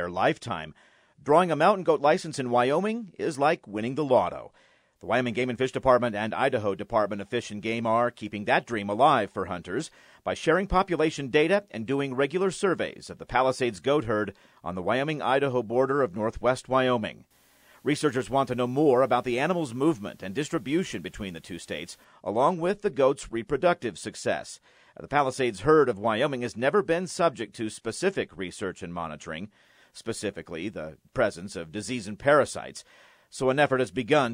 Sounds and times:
Speech: 0.0 - 34.3.

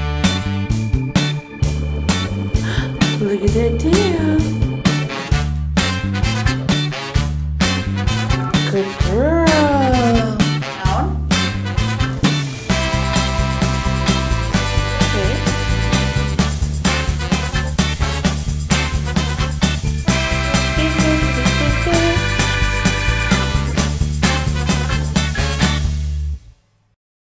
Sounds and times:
Music: 0.0 - 27.0
Speech: 2.7 - 4.6, 8.6 - 11.3, 15.1 - 15.5, 20.8 - 22.3.

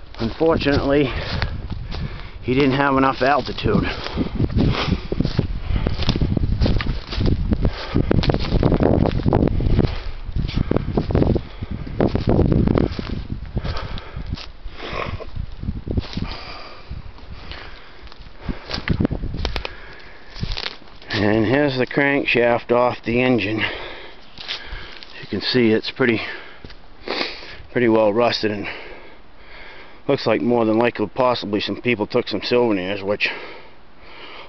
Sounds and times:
Outside, rural or natural: 0.0 - 34.4.

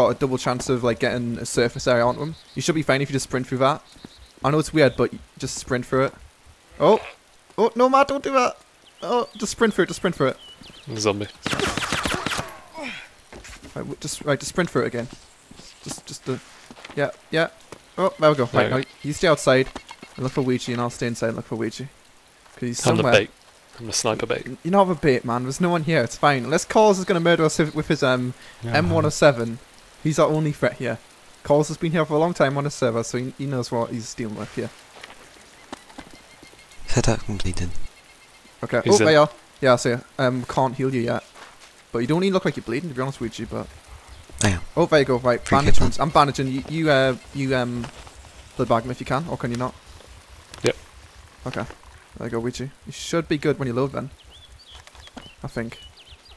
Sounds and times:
Speech: 6.8 - 11.4, 17.0 - 21.9, 22.6 - 34.7, 36.8 - 37.8, 38.6 - 41.3, 44.4 - 47.9, 48.6 - 49.8, 51.5 - 54.1, 55.4 - 55.8
Walk, footsteps: 13.3 - 13.8, 15.0 - 17.0, 34.9 - 36.2, 41.3 - 41.8.

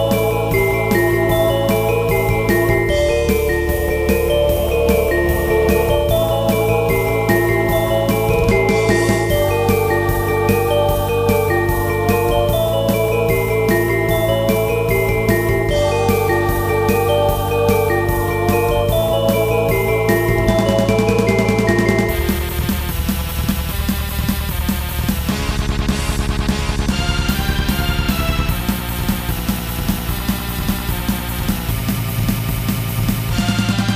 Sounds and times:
Electric piano: 0.0 - 22.7.

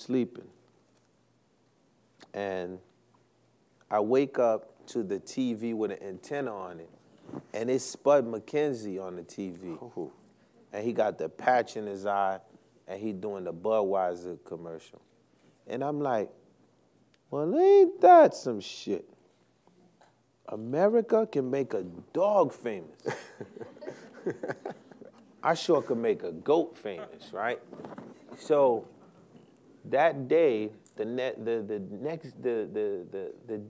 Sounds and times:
Speech: 0.0 - 0.5, 2.3 - 2.9, 3.9 - 6.9, 7.5 - 15.0, 15.7 - 16.4, 17.3 - 19.1, 20.5 - 23.1, 25.4 - 27.7, 29.9 - 33.7.

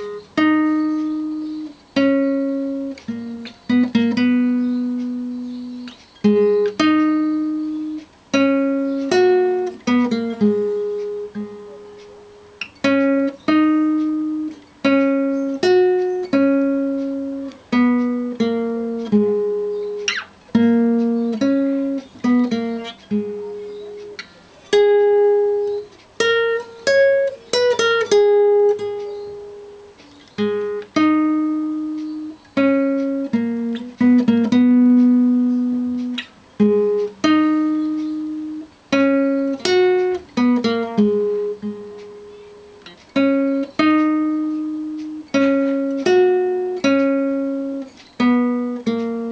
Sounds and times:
Guitar: 0.0 - 49.3.

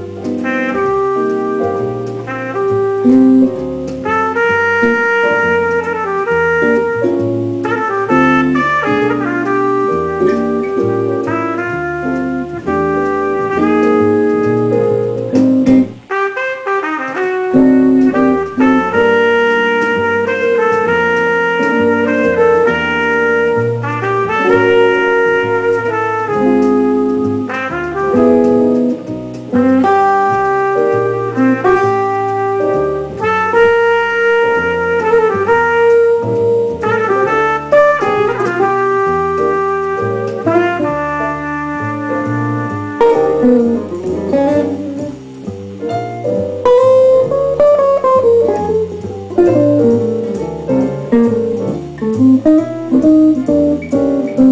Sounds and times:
Acoustic guitar: 0.0 - 54.5
Jazz: 0.0 - 54.5
Strum: 0.0 - 54.5.

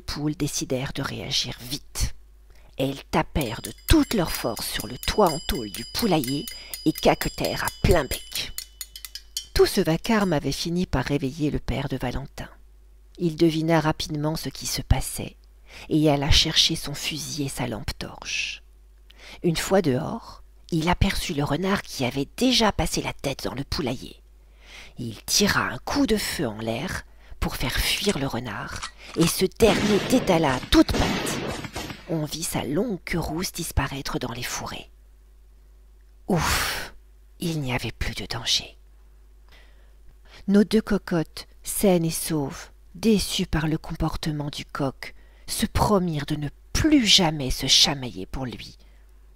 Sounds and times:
Speech: 0.0 - 2.2, 2.8 - 8.6, 9.6 - 12.6, 13.2 - 18.7, 19.3 - 24.2, 25.0 - 31.4, 32.1 - 35.0, 36.3 - 38.8, 40.4 - 48.8.

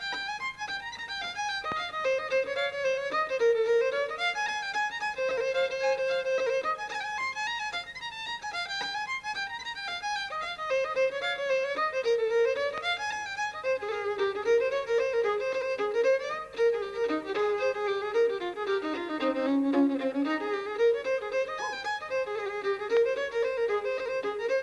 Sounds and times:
Music: 0.0 - 24.6.

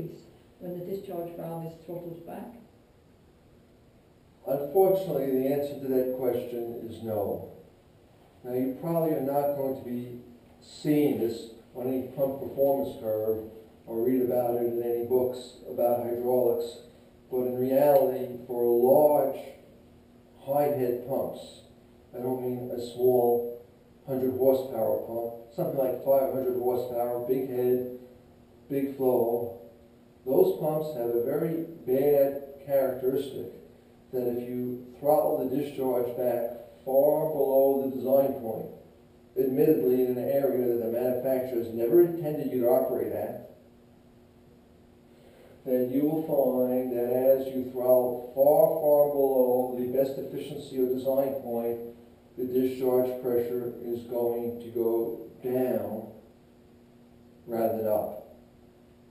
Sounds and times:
Speech: 0.0 - 2.7, 4.4 - 7.6, 8.4 - 19.6, 20.4 - 28.0, 28.7 - 29.7, 30.3 - 38.8, 39.4 - 43.6, 45.6 - 56.2, 57.5 - 58.4.

